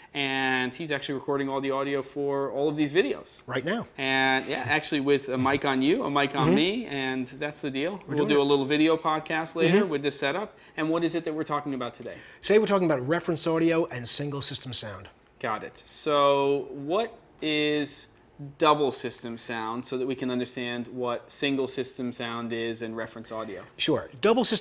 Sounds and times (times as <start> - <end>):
Speech: 0.2 - 24.6.